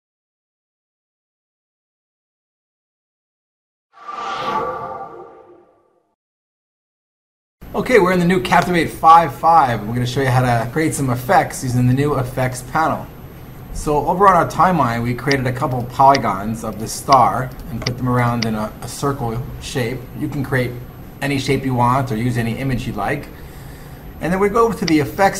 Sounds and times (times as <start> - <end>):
Speech: 7.7 - 13.1, 13.8 - 23.4, 24.2 - 25.3.